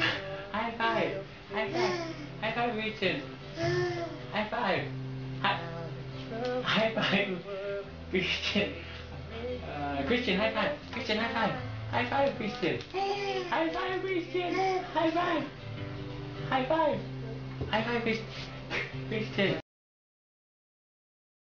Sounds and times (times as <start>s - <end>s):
Music: 0.0s - 19.6s
Speech: 17.7s - 18.2s.